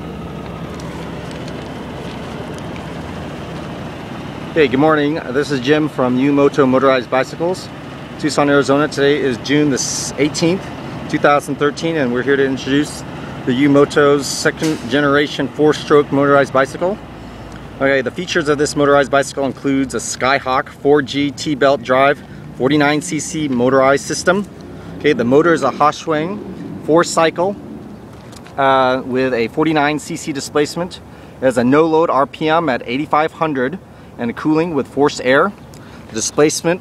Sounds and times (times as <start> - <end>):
Vehicle: 0.0 - 36.8
Speech: 4.6 - 17.0, 17.8 - 27.6, 28.6 - 36.8.